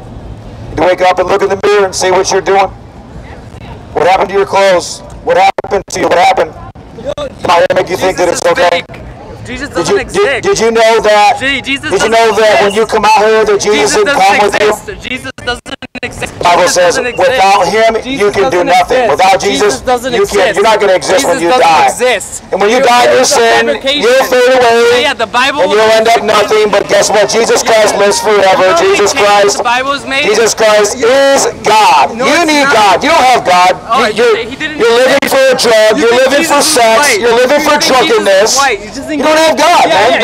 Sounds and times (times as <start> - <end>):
Speech: 3.3 - 40.2.